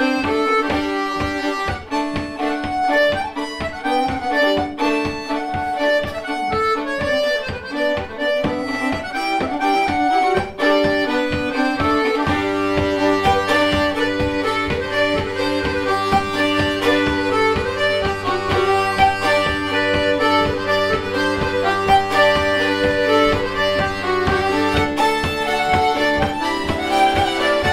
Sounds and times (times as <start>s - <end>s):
Music: 0.0s - 27.7s.